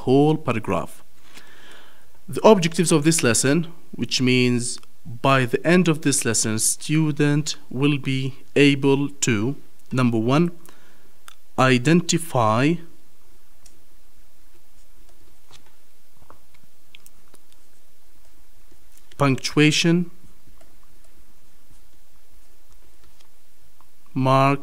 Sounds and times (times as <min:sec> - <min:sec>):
Speech: 0:00.0 - 0:01.0, 0:02.3 - 0:10.6, 0:11.6 - 0:12.9, 0:19.2 - 0:20.2, 0:24.2 - 0:24.6.